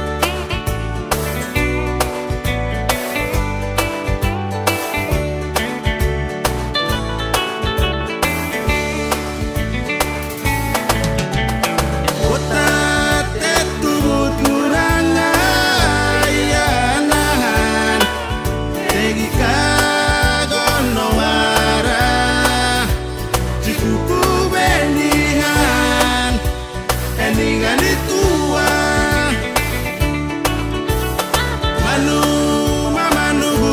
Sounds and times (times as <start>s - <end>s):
Pop music: 0.0s - 33.7s.